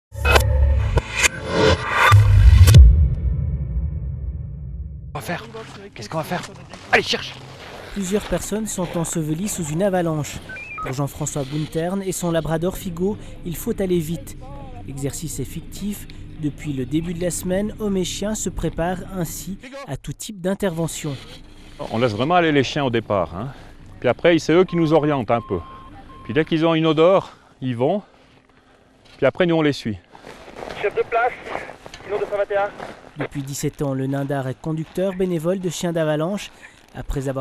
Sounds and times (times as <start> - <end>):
Music: 0.1 - 4.7
Speech: 5.2 - 7.3, 8.0 - 25.6, 29.2 - 30.0, 30.8 - 37.4.